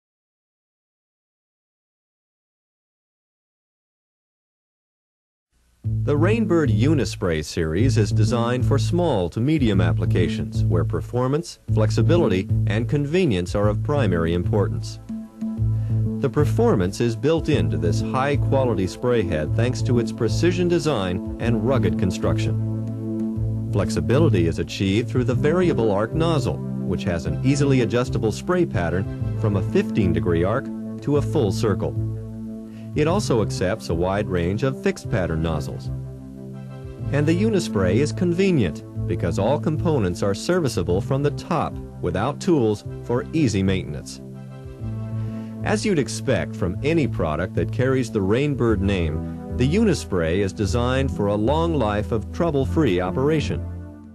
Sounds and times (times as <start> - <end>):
Music: 5.5 - 54.1
Speech: 6.1 - 15.0, 16.2 - 22.6, 23.8 - 32.0, 33.0 - 35.9, 37.1 - 44.2, 45.6 - 53.6.